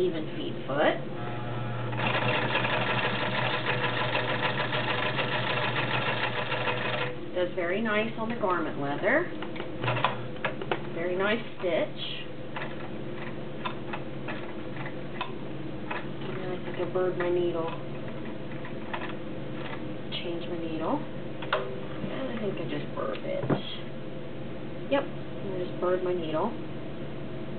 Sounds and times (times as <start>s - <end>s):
Speech: 0.0s - 1.0s, 7.4s - 9.3s, 11.0s - 12.3s, 16.2s - 17.8s, 20.1s - 21.1s, 22.0s - 23.9s, 24.9s - 26.6s.